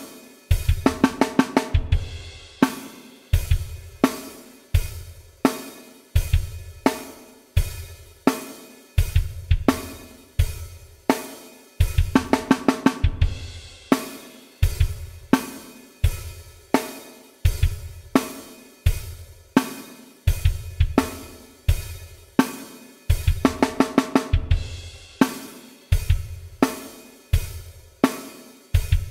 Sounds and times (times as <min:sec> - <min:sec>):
Snare drum: 0:00.0 - 0:29.1
Bass drum: 0:00.6 - 0:02.6, 0:03.4 - 0:04.0, 0:06.2 - 0:06.8, 0:09.0 - 0:10.8, 0:11.8 - 0:13.8, 0:14.6 - 0:15.3, 0:20.3 - 0:22.0, 0:23.1 - 0:25.2, 0:26.0 - 0:26.6, 0:28.8 - 0:29.1.